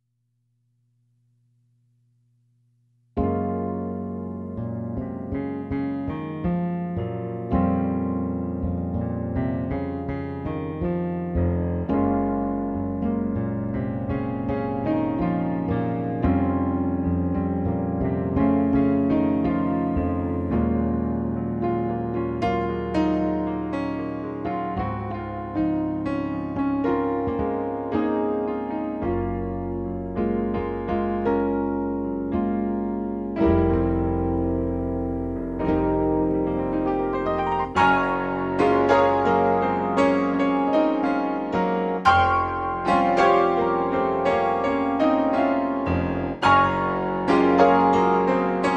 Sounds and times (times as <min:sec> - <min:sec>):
Electric piano: 0:03.2 - 0:48.7.